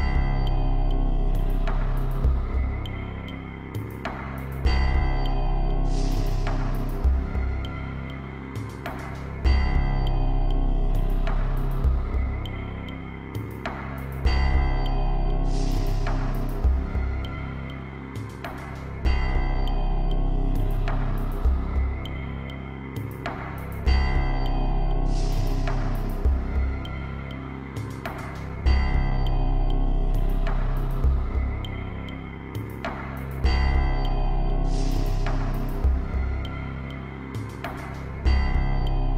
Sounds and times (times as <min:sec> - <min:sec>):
Background music: 0:00.0 - 0:39.1.